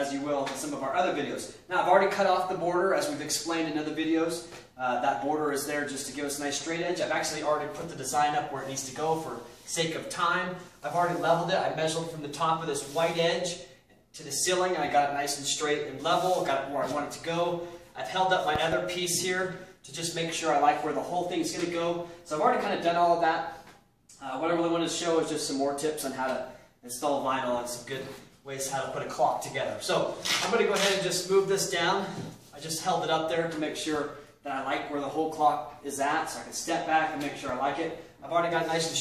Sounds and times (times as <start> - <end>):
Speech: 0.0 - 39.0.